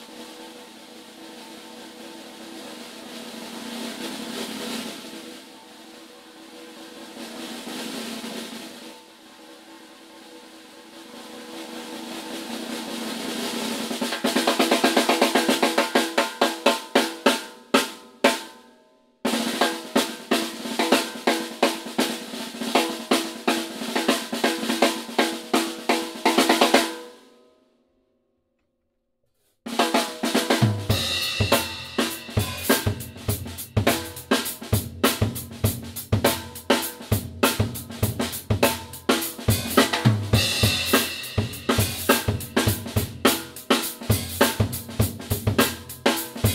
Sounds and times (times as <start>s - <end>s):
Drum kit: 0.0s - 18.6s, 19.2s - 27.2s, 29.7s - 46.5s
Rimshot: 29.8s - 46.5s
Bass drum: 30.6s - 46.5s.